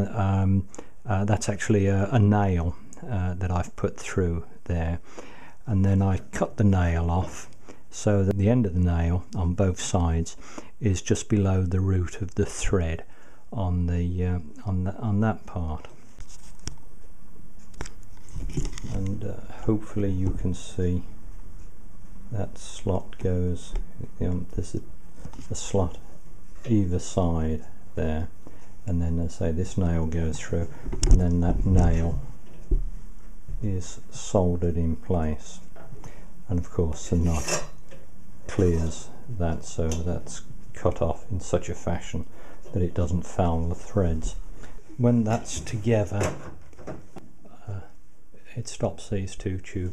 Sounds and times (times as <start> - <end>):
Speech: 0.0 - 5.0, 5.6 - 16.0, 18.9 - 21.2, 22.3 - 32.4, 33.6 - 35.8, 36.5 - 37.8, 38.5 - 44.4, 45.0 - 46.5, 47.5 - 49.9.